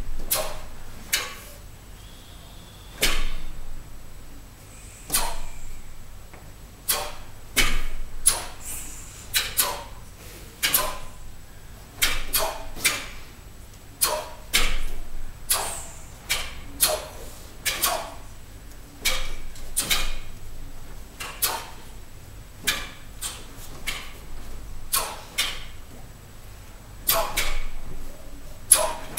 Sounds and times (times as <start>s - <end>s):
Inside, large room or hall: 0.0s - 29.1s.